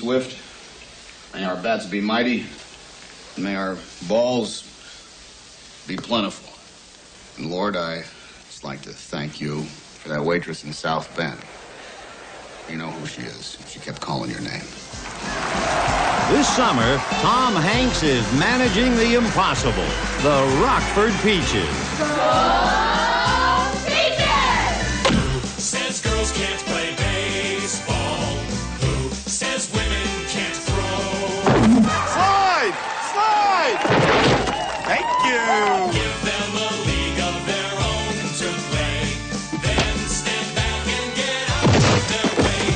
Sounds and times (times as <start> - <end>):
Speech: 1.4 - 2.6, 5.9 - 6.6, 7.4 - 11.5, 12.7 - 14.8, 16.3 - 21.8.